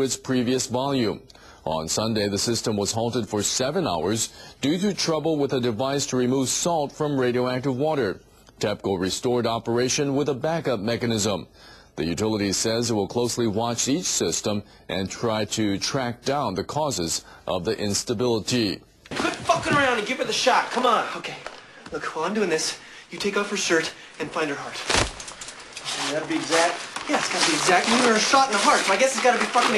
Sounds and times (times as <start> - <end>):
Speech: 0.0 - 24.9, 25.9 - 29.7.